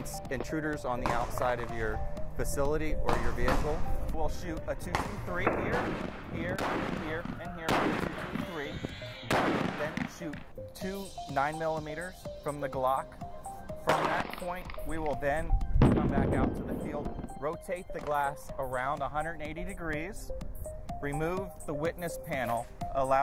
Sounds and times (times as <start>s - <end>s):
Speech: 0.0s - 8.8s, 9.8s - 13.1s, 13.9s - 20.2s, 21.0s - 23.2s
Music: 0.0s - 23.2s
Gunshot, gunfire: 1.0s - 1.6s, 3.1s - 3.8s, 4.9s - 10.4s, 13.9s - 14.8s, 15.9s - 17.0s.